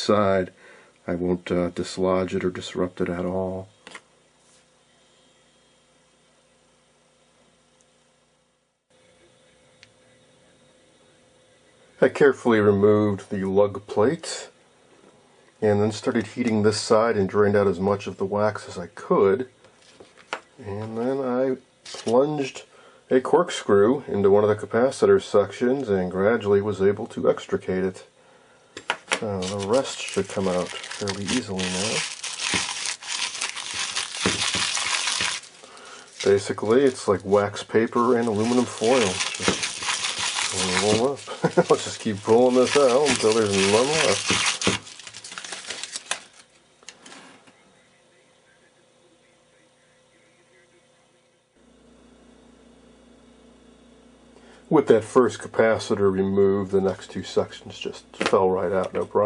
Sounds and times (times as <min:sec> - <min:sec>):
Speech: 0:00.0 - 0:03.7, 0:12.0 - 0:14.6, 0:15.6 - 0:19.6, 0:20.6 - 0:28.1, 0:29.2 - 0:32.1, 0:36.2 - 0:39.6, 0:40.5 - 0:44.4, 0:47.5 - 0:51.4, 0:54.7 - 0:59.2
Inside, small room: 0:00.0 - 0:59.2.